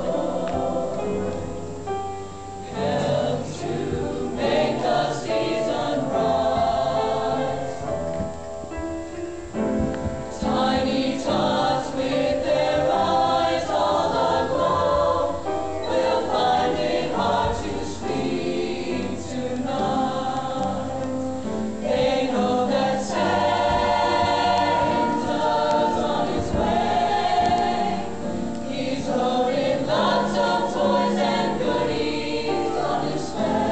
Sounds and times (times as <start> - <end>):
Choir: 0.0 - 2.0, 2.6 - 8.3, 9.5 - 33.7.